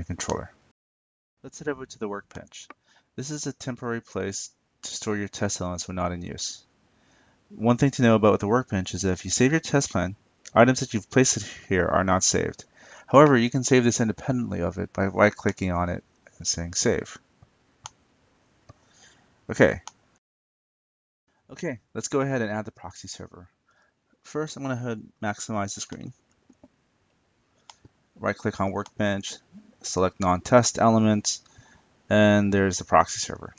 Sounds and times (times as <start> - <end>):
Speech: 0.0 - 0.6, 1.5 - 6.7, 7.5 - 17.2, 19.5 - 19.9, 21.5 - 23.5, 24.3 - 26.2, 28.2 - 31.5, 32.1 - 33.5
Inside, small room: 0.0 - 0.8, 1.4 - 20.2, 21.3 - 33.5.